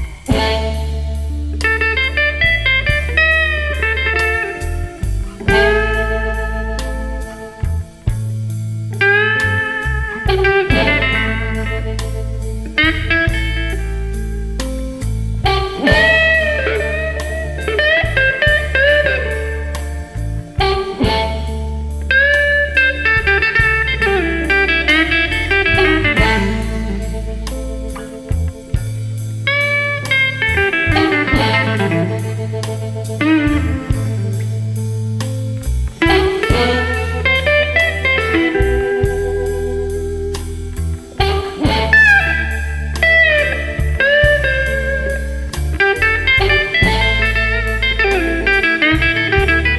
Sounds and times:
Music: 0.0 - 49.7.

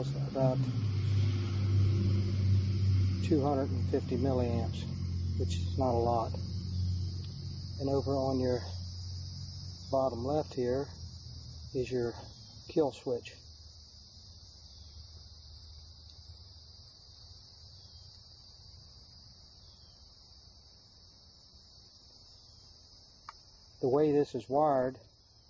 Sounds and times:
Speech: 0.0 - 0.6, 3.2 - 6.4, 7.8 - 8.8, 9.9 - 10.9, 11.8 - 13.4, 23.8 - 25.0.

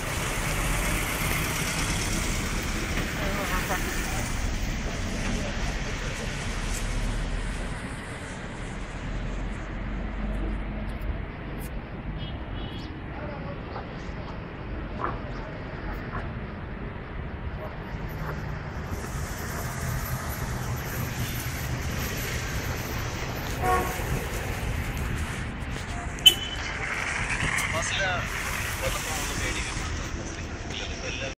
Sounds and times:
Car: 0.0 - 31.3
Speech: 27.7 - 31.3.

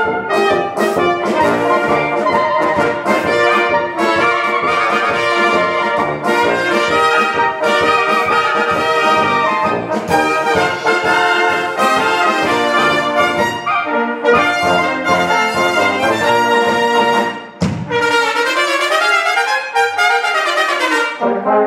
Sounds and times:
Clarinet: 0.0 - 21.6
Trumpet: 0.0 - 21.6.

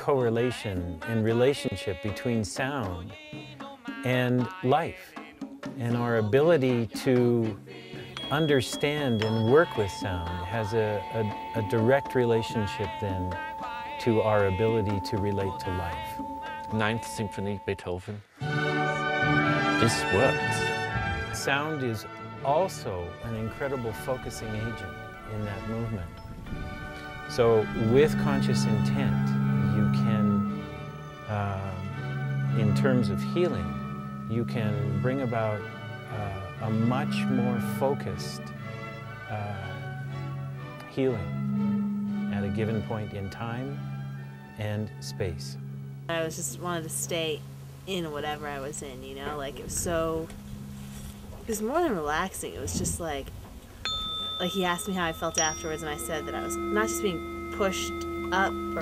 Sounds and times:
Speech: 0.0 - 3.2, 4.0 - 5.2, 5.8 - 7.6, 8.2 - 13.4, 14.0 - 18.3, 19.8 - 20.8, 21.4 - 26.2, 27.3 - 30.5, 31.3 - 31.9, 32.6 - 33.7, 34.3 - 38.5, 39.3 - 39.8, 40.9 - 41.3, 42.3 - 43.8, 44.6 - 50.3, 51.5 - 53.3, 54.4 - 58.8
Music: 0.0 - 58.8.

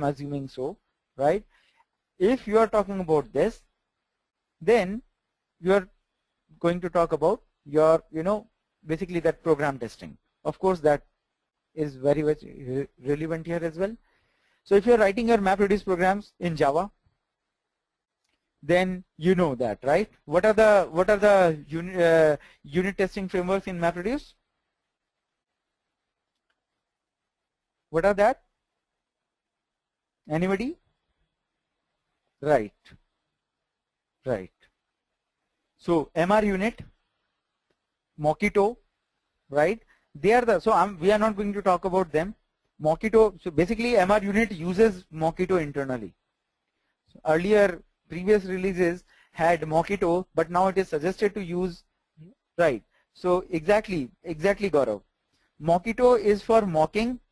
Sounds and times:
Speech: 0.0 - 1.5, 2.2 - 3.7, 4.6 - 5.9, 6.6 - 11.1, 11.8 - 14.0, 14.7 - 17.0, 18.6 - 24.4, 27.9 - 28.5, 30.3 - 30.8, 32.4 - 33.0, 34.2 - 34.6, 35.8 - 36.9, 38.2 - 38.8, 39.5 - 46.2, 47.2 - 57.3.

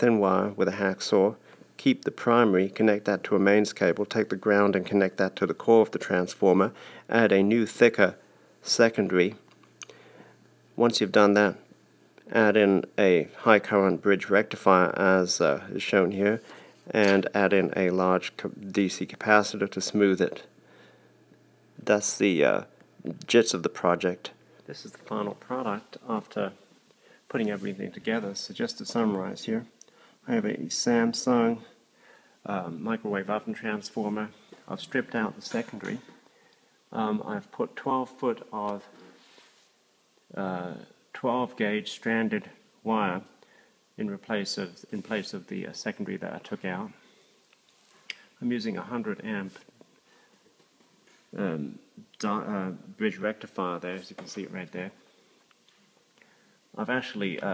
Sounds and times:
Speech: 0.0 - 9.4, 10.8 - 20.5, 21.8 - 26.6, 27.3 - 31.8, 32.4 - 36.2, 36.9 - 39.1, 40.3 - 43.4, 44.0 - 47.0, 48.4 - 49.7, 51.3 - 55.0, 56.8 - 57.5.

